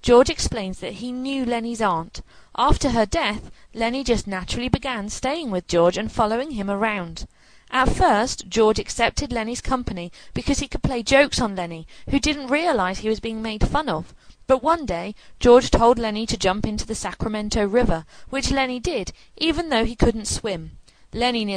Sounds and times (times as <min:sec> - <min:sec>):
Speech: 0:00.0 - 0:21.5.